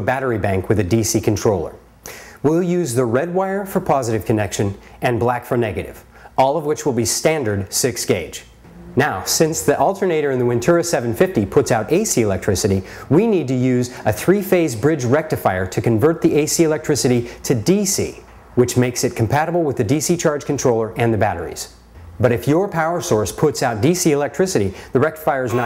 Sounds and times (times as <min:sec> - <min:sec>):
Speech: 0:00.0 - 0:01.8, 0:02.4 - 0:25.6.